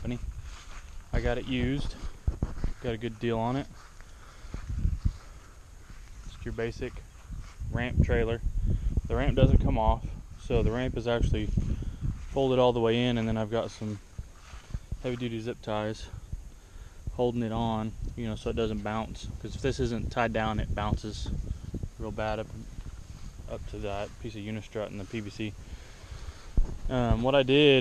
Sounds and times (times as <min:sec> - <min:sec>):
Speech: 0:00.0 - 0:00.3, 0:01.1 - 0:02.1, 0:02.7 - 0:03.8, 0:06.2 - 0:07.0, 0:07.7 - 0:08.4, 0:09.1 - 0:11.6, 0:12.3 - 0:14.0, 0:15.0 - 0:16.2, 0:17.1 - 0:21.4, 0:22.0 - 0:22.7, 0:23.5 - 0:25.6, 0:26.9 - 0:27.8.